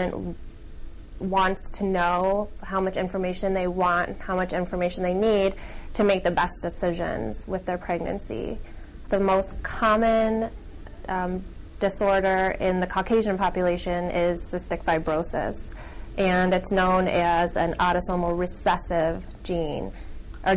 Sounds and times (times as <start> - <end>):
Female speech, woman speaking: 0.0 - 0.4, 1.2 - 20.5.